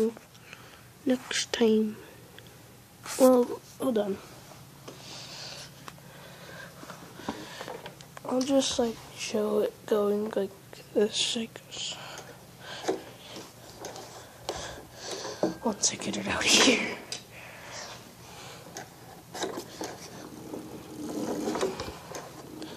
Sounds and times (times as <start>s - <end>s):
Inside, small room: 0.0s - 22.7s
Speech: 1.1s - 2.0s, 3.2s - 4.2s, 8.2s - 12.0s, 15.6s - 17.1s.